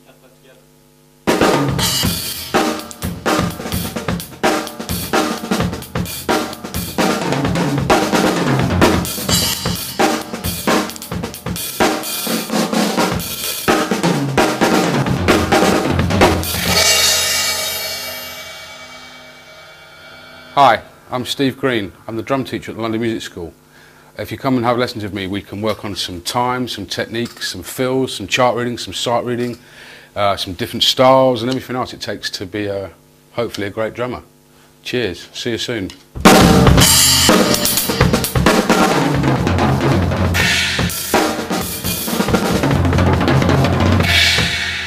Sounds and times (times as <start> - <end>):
Speech: 0.0 - 0.7, 20.6 - 23.6, 24.2 - 29.6, 30.2 - 36.0
Bass drum: 1.3 - 12.0, 13.0 - 18.1, 36.2 - 44.8
Drum kit: 1.3 - 21.2, 36.2 - 44.8.